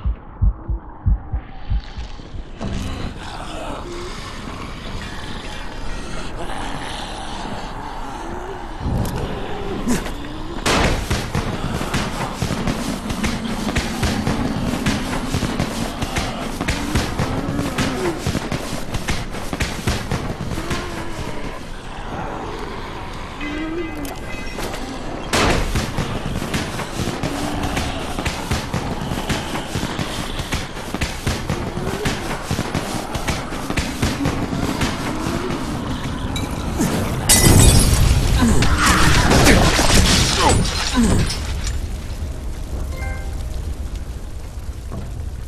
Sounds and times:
Outside, urban or manmade: 0:00.0 - 0:45.4.

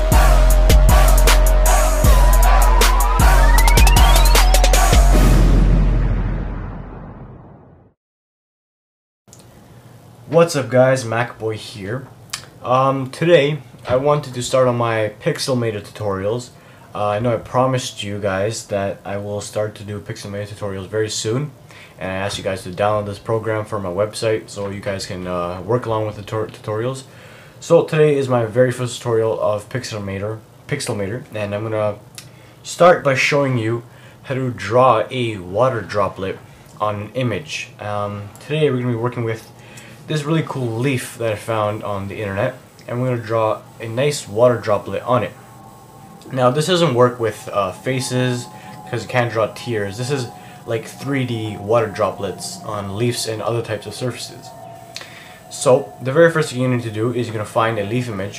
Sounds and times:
Speech: 0:10.3 - 0:32.0, 0:32.6 - 0:39.5, 0:40.1 - 0:45.4, 0:46.3 - 0:54.6, 0:55.4 - 0:58.3.

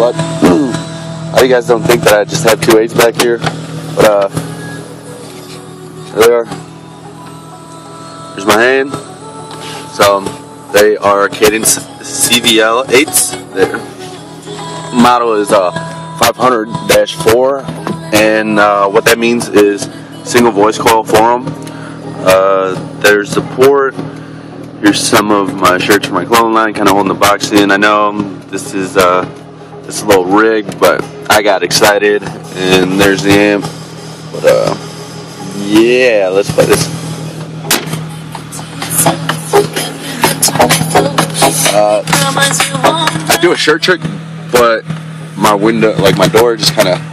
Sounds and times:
Music: 0:00.0 - 0:45.4
Speech: 0:01.4 - 0:03.4, 0:04.0 - 0:04.3, 0:18.2 - 0:21.4, 0:22.3 - 0:24.0, 0:24.8 - 0:29.3, 0:29.9 - 0:33.6, 0:34.4 - 0:34.8, 0:35.5 - 0:36.9, 0:41.7 - 0:42.1, 0:43.3 - 0:44.8, 0:45.4 - 0:47.0.

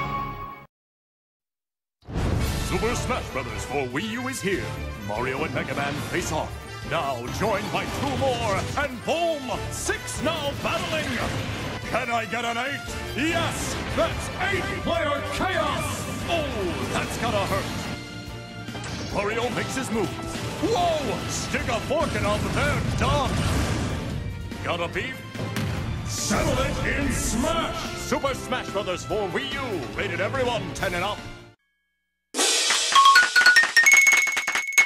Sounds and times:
Music: 0:00.0 - 0:00.7, 0:02.3 - 0:31.6, 0:32.4 - 0:34.3
Speech: 0:02.7 - 0:11.3, 0:11.9 - 0:17.6, 0:19.1 - 0:23.4, 0:24.6 - 0:25.2, 0:26.1 - 0:31.2.

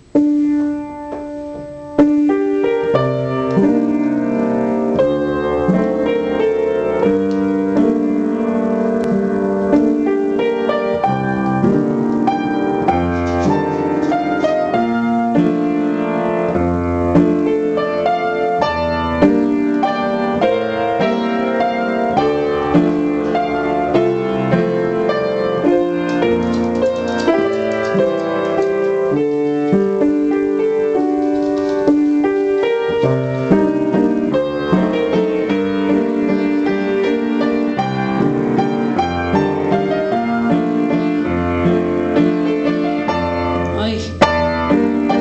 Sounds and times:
Music: 0:00.0 - 0:45.2.

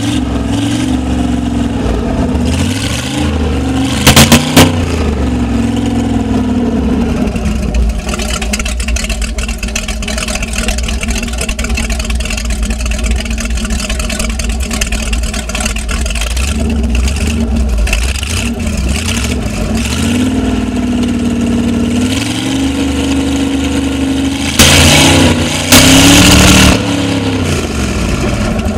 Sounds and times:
Heavy engine (low frequency): 0:00.0 - 0:28.7.

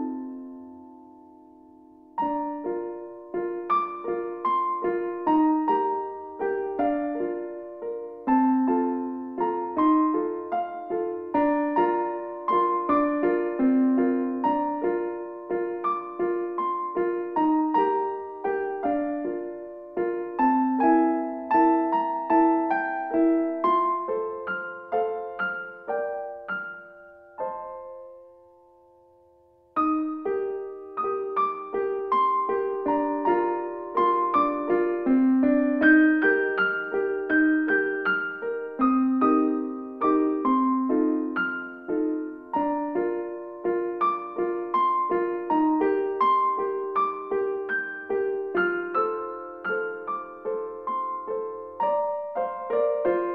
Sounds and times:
Music: 0:00.0 - 0:53.3.

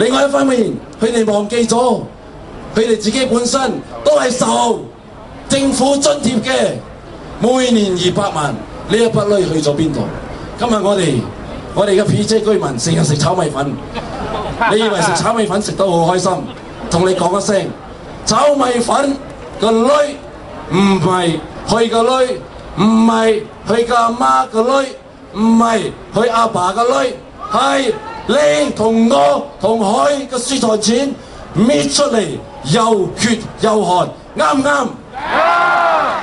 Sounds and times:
Speech: 0:00.0 - 0:02.1, 0:02.8 - 0:35.0.

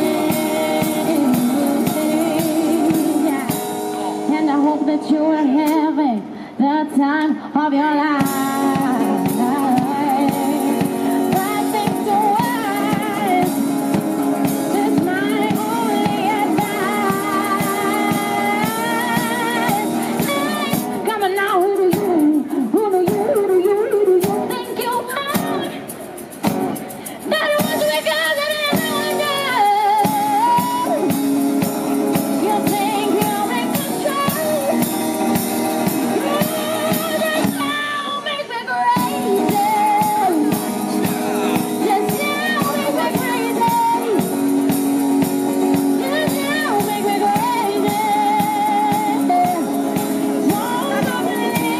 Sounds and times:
Music: 0:00.0 - 0:51.7.

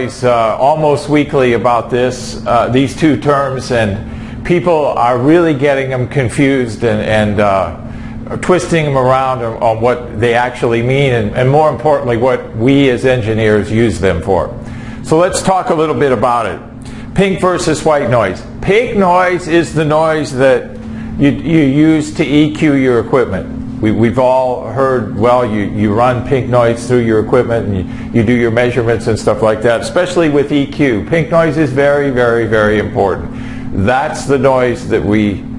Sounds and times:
Speech: 0:00.0 - 0:35.5.

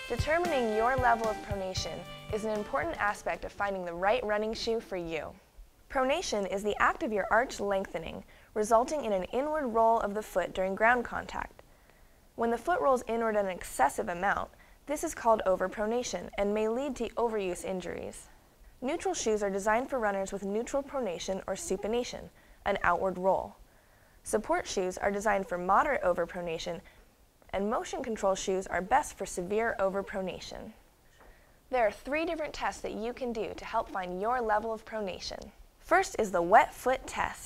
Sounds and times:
Inside, small room: 0:00.0 - 0:37.4
Speech: 0:00.1 - 0:11.6, 0:12.4 - 0:23.6, 0:24.2 - 0:26.9, 0:27.5 - 0:30.8, 0:31.7 - 0:37.4.

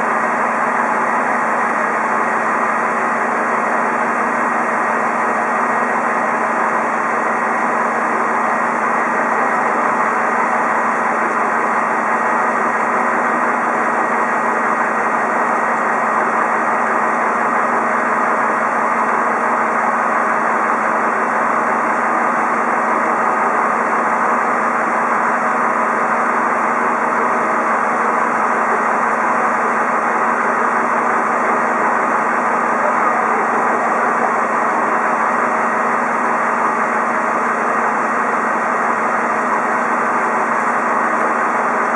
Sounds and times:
Vehicle: 0:00.0 - 0:41.9.

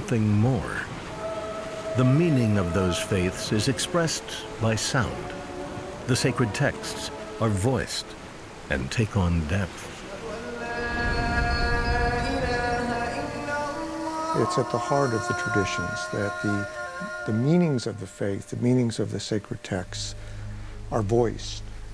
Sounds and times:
Speech: 0:00.0 - 0:00.9, 0:02.0 - 0:05.3, 0:06.1 - 0:08.1, 0:08.7 - 0:09.8, 0:14.4 - 0:20.2, 0:20.9 - 0:21.6
Music: 0:00.0 - 0:08.4, 0:10.2 - 0:21.9.

